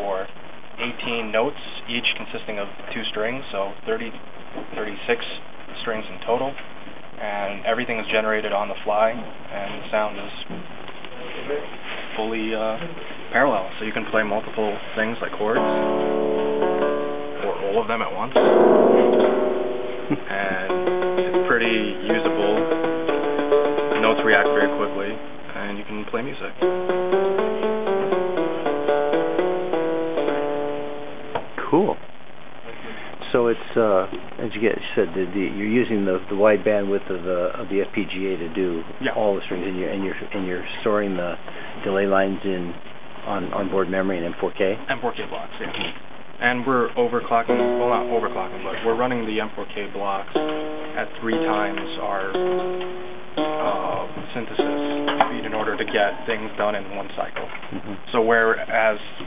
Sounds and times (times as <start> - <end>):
Speech: 0.0 - 6.6, 7.2 - 15.8, 17.4 - 18.4, 20.1 - 20.8, 21.4 - 22.7, 23.9 - 26.6, 31.6 - 32.0, 33.2 - 50.4, 51.0 - 52.4, 53.6 - 59.2
Harpsichord: 15.6 - 25.5, 26.6 - 31.4, 50.3 - 55.9.